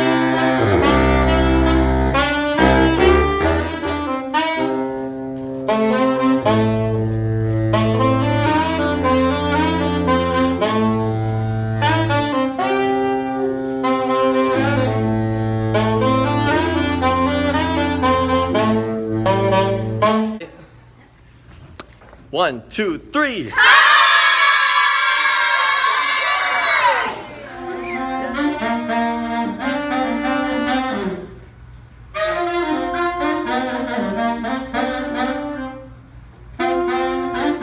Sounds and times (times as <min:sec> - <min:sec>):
Saxophone: 0:00.0 - 0:20.5, 0:26.8 - 0:37.6.